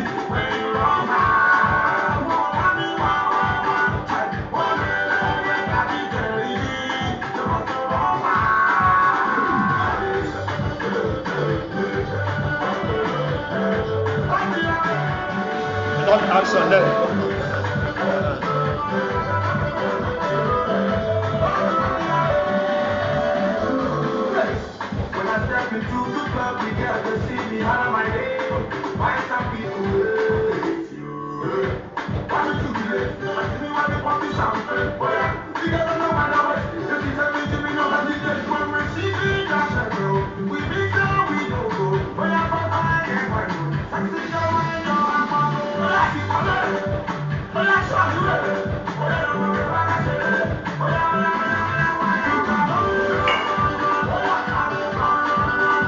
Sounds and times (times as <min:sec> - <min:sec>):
Music: 0:00.0 - 0:55.8
Speech: 0:16.0 - 0:17.4.